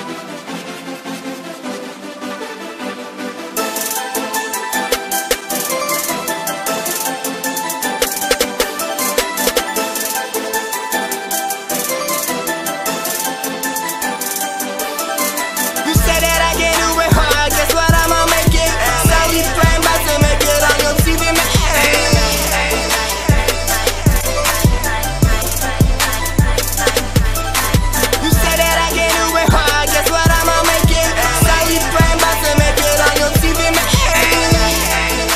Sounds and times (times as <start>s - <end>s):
Rhythm and blues: 3.5s - 35.3s.